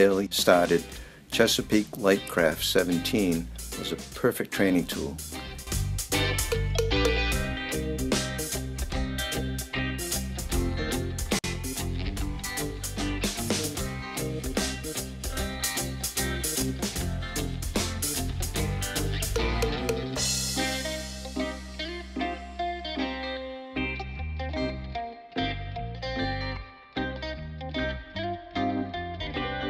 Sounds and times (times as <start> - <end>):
Music: 0.0 - 29.7.